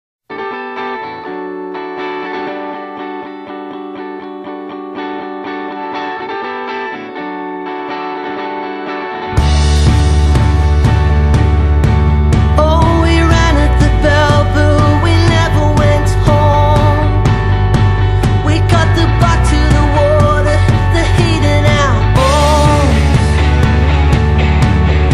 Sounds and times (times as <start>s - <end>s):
Effects unit: 0.3s - 25.1s
Music: 0.3s - 25.1s.